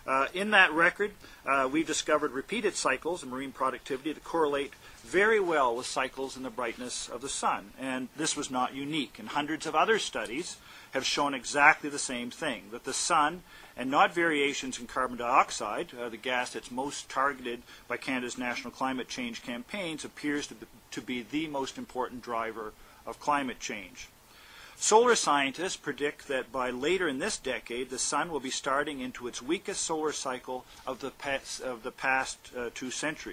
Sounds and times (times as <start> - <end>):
Speech: 0.1 - 24.1, 24.8 - 33.3.